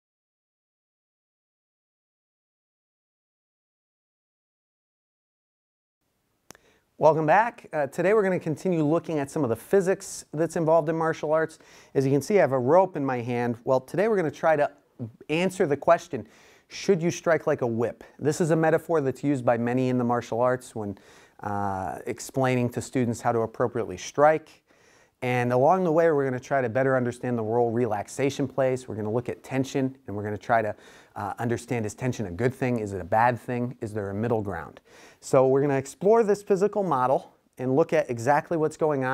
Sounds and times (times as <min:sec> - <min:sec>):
Speech: 0:07.0 - 0:24.6, 0:25.2 - 0:39.1.